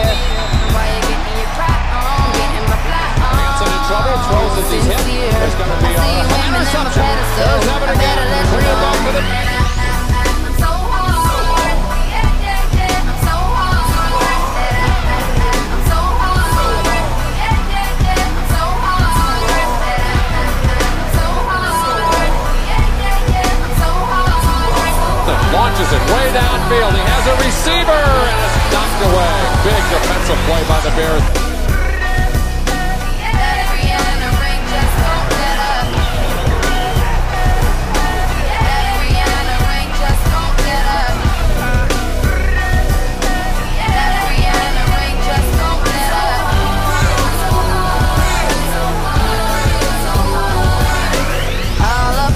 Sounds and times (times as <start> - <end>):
Music: 0.0 - 52.3
Speech: 2.1 - 9.7, 24.6 - 31.4.